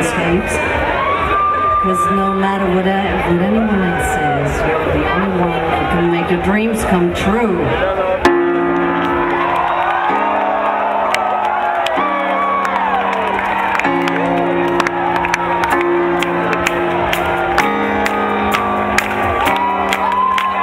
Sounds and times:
Music: 0.0s - 20.6s
Speech: 1.8s - 8.2s.

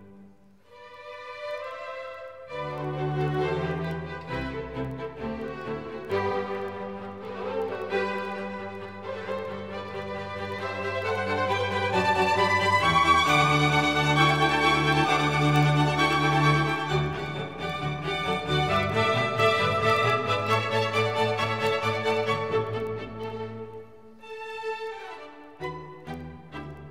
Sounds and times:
Music: 0.0s - 26.9s.

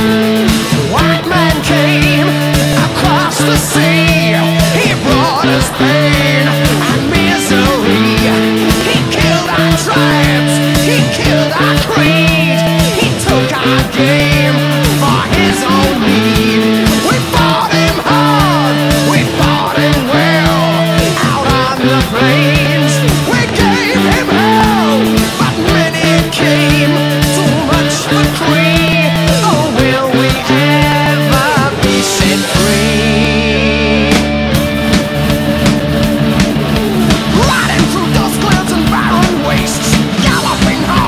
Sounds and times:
Music: 0.0s - 41.0s.

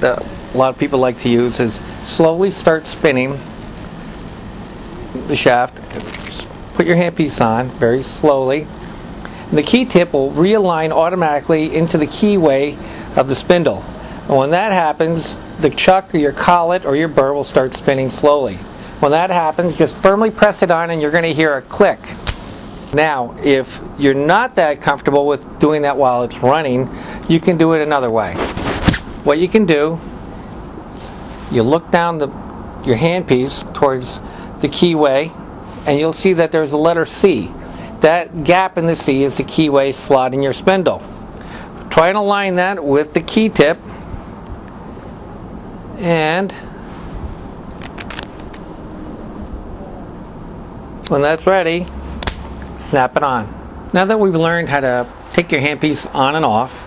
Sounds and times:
Speech: 0.0s - 3.5s, 5.2s - 8.7s, 9.5s - 22.2s, 23.0s - 28.5s, 29.2s - 30.0s, 31.0s - 41.1s, 41.9s - 43.8s, 46.0s - 46.7s, 51.1s - 51.9s, 52.8s - 56.8s.

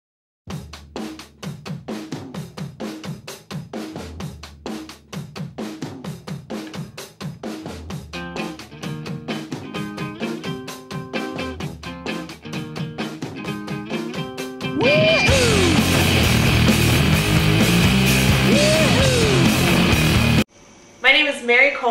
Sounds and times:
Bass drum: 0.5s - 6.5s, 7.3s - 8.4s, 14.7s - 20.4s
Drum kit: 0.5s - 20.5s.

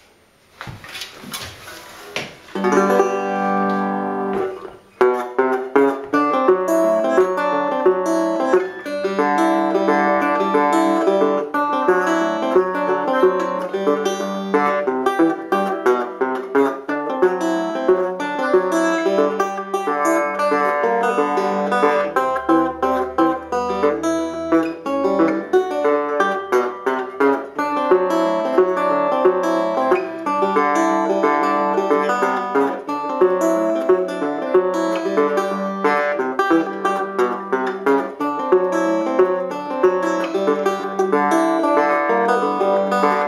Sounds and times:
Guitar: 0.0s - 43.2s.

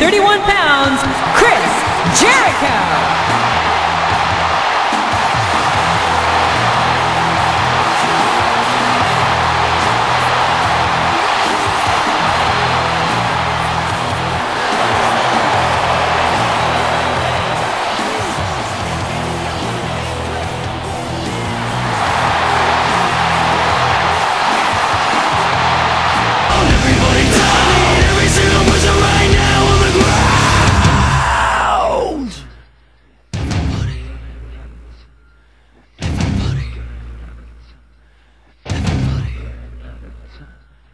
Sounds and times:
Music: 0.0s - 32.7s, 33.3s - 40.9s.

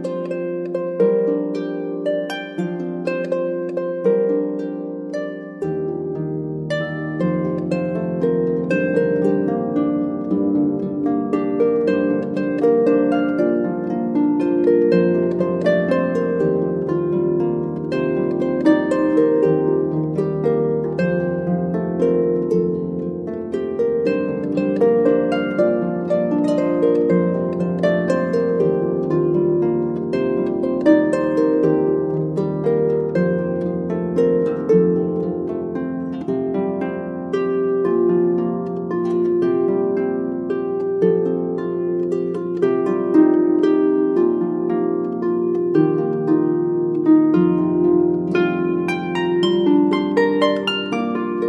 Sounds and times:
Harp: 0.0s - 51.4s
Plucked string instrument: 0.0s - 51.4s.

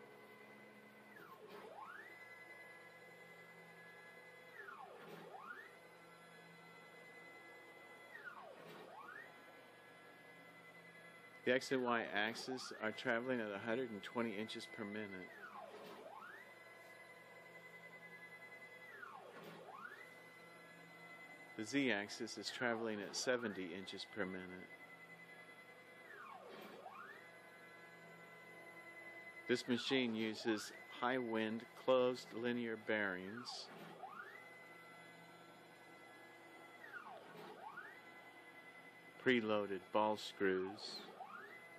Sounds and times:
Speech: 11.5s - 15.3s, 21.6s - 24.7s, 29.5s - 33.7s, 39.2s - 41.1s.

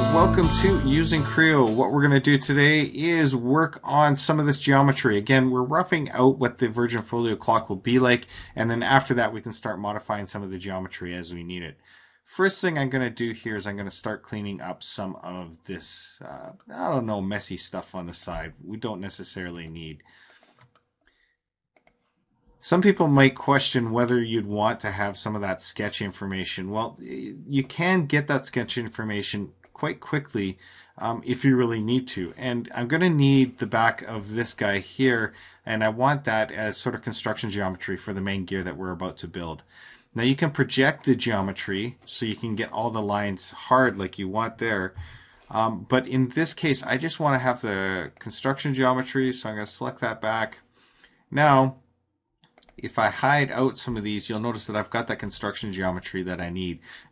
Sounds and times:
Speech: 0.0s - 20.2s, 22.6s - 50.7s, 51.3s - 51.8s, 52.7s - 57.1s.

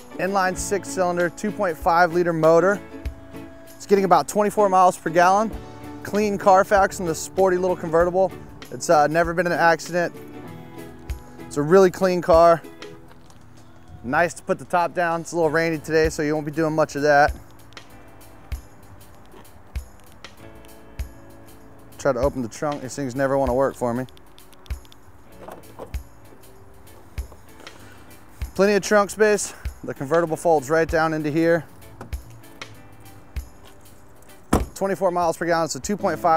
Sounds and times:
Music: 0.0s - 36.3s
Speech: 14.0s - 17.3s, 22.0s - 24.1s, 28.6s - 31.6s, 34.8s - 36.3s.

